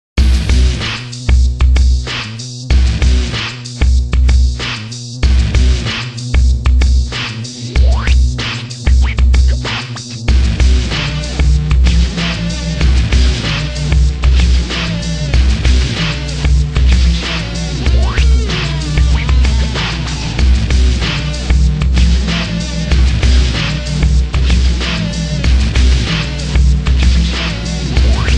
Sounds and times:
Sampler: 7.6 - 10.1, 17.1 - 20.6, 27.2 - 28.3.

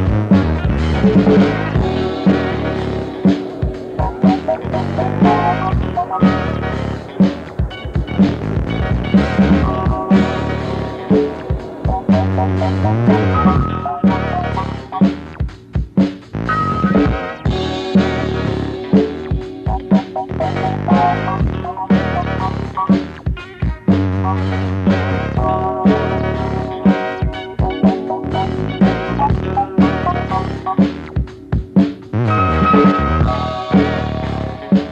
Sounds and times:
Funk: 0.0 - 34.9.

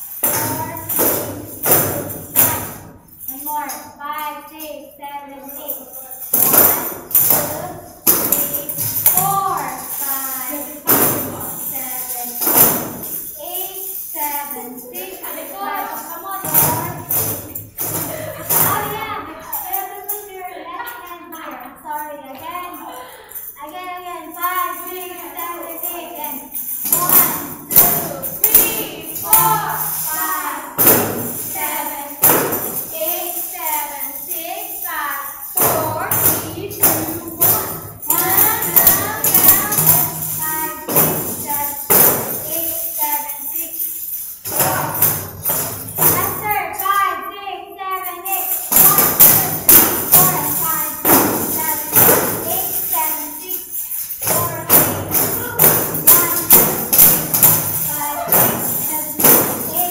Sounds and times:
Tambourine: 0.0 - 21.4, 22.4 - 47.2, 48.1 - 59.9
Speech: 3.3 - 6.3, 7.3 - 12.5, 13.4 - 17.2, 18.0 - 32.2, 32.9 - 43.8, 46.2 - 56.8, 57.9 - 59.9.

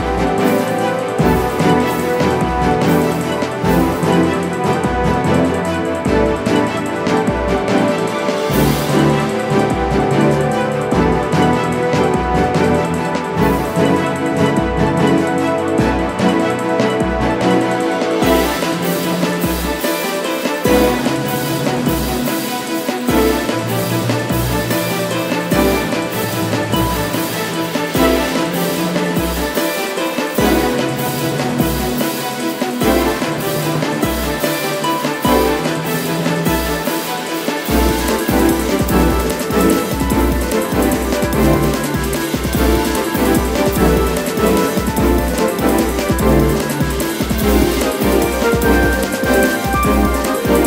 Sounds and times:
Video game music: 0.0 - 50.6.

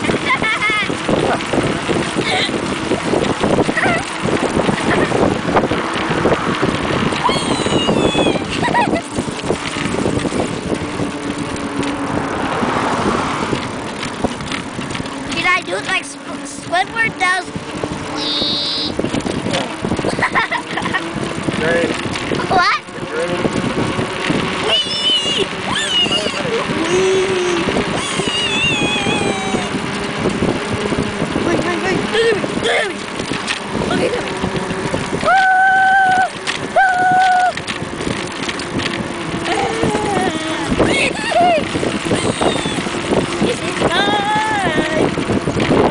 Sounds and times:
Bicycle: 0.0 - 45.9.

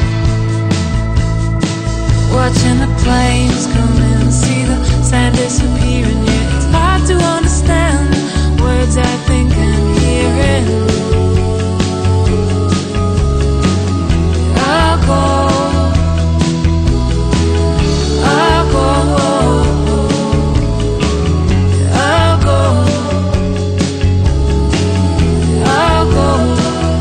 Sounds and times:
Music: 0.0 - 27.0.

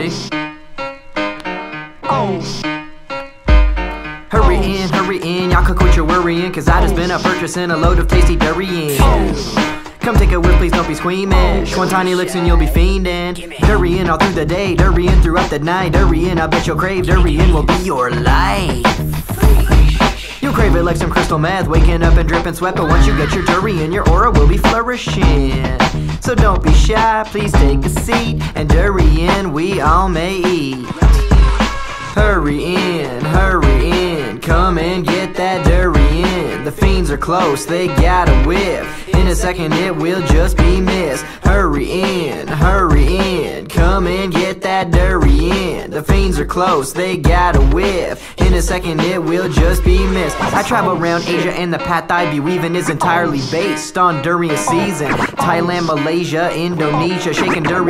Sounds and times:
Music: 0.0 - 57.9.

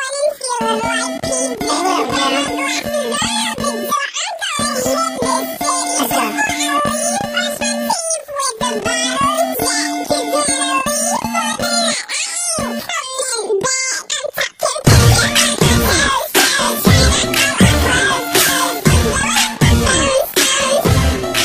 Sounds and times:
Singing: 0.0 - 21.4.

